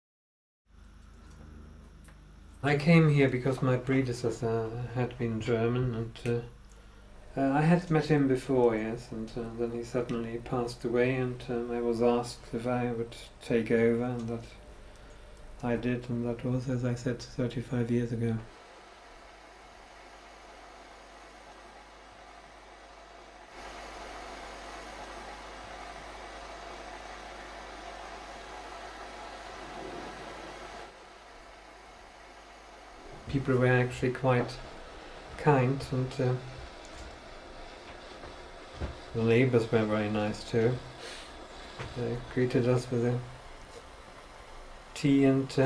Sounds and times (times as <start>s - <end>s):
Speech: 2.6s - 6.6s, 7.3s - 14.6s, 15.6s - 18.5s, 33.3s - 34.7s, 35.4s - 36.6s, 39.1s - 40.9s, 41.8s - 43.4s, 45.0s - 45.6s.